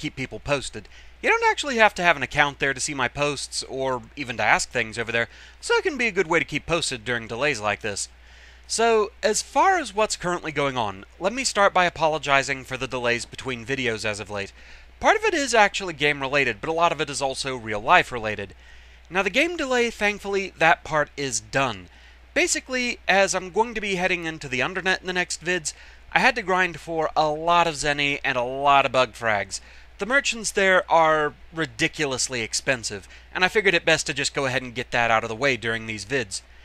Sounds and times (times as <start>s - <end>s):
Speech: 0.0s - 8.1s, 8.7s - 36.5s.